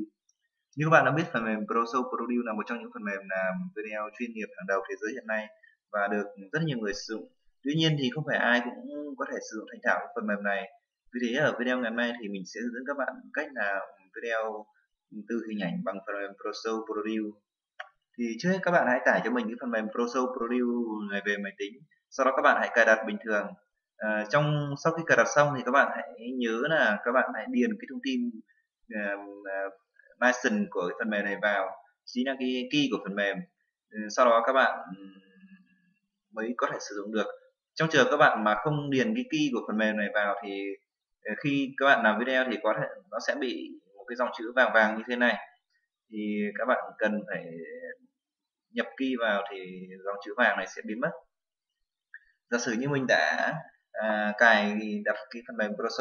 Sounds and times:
Speech: 0.8 - 17.4, 18.2 - 35.7, 36.4 - 48.1, 48.8 - 51.2, 52.5 - 56.0.

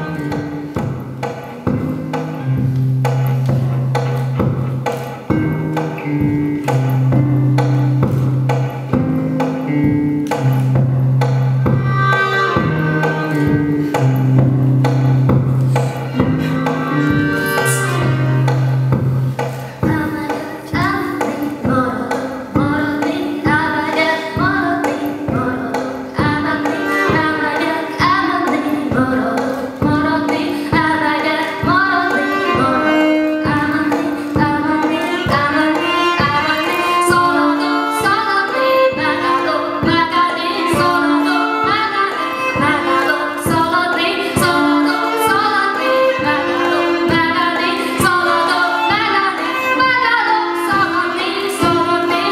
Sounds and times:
Music: 0.0 - 52.3
Female singing: 19.8 - 52.3.

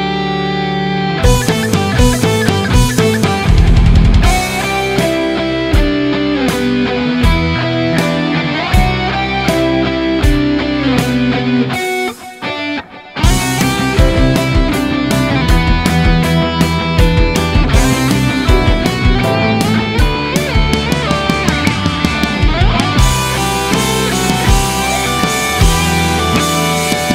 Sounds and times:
Electric guitar: 0.0 - 27.1
Strum: 1.2 - 7.6, 13.3 - 27.1.

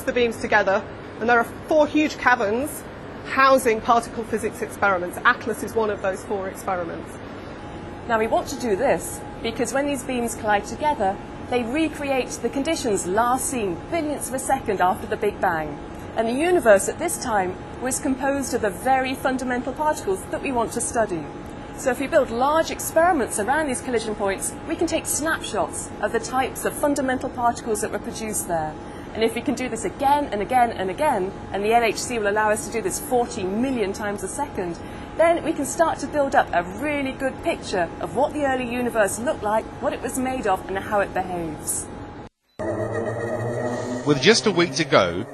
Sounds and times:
Speech: 0.0 - 7.1, 8.1 - 41.9, 44.1 - 45.3.

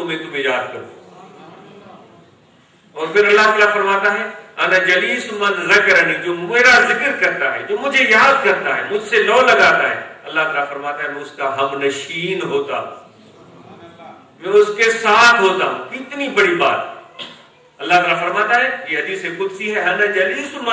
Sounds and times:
Male speech, man speaking: 0.0 - 1.0, 3.0 - 13.0, 13.9 - 17.0, 17.8 - 20.7
Narration, monologue: 0.0 - 20.7.

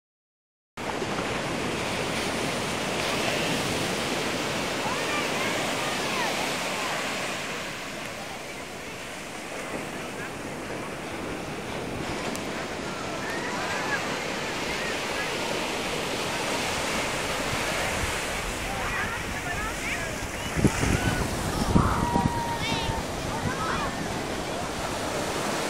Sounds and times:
Outside, rural or natural: 0.8 - 25.6
Waves, surf: 0.8 - 25.6.

